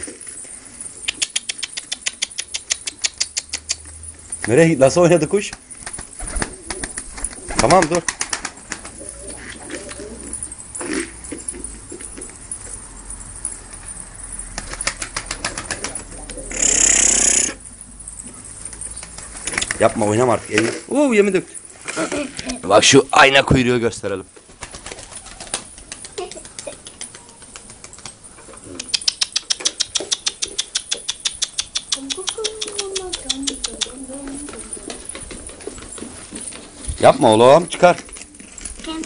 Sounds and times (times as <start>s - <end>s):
Pigeon, dove: 0.0s - 4.6s, 5.4s - 20.8s, 24.4s - 39.0s
Speech: 32.0s - 34.8s.